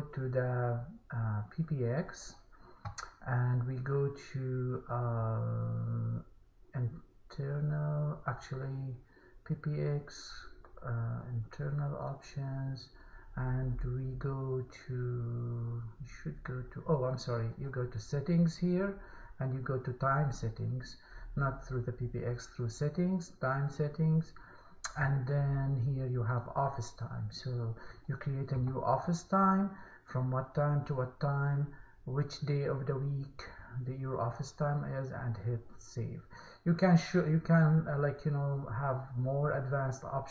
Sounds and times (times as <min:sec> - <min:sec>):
Speech: 0:00.0 - 0:40.3.